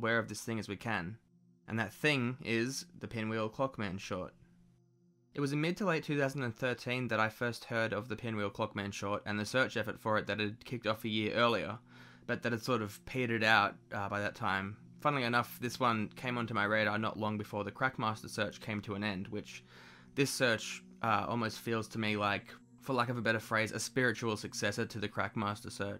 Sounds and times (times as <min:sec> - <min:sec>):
Speech: 0:00.0 - 0:04.3, 0:05.4 - 0:25.9.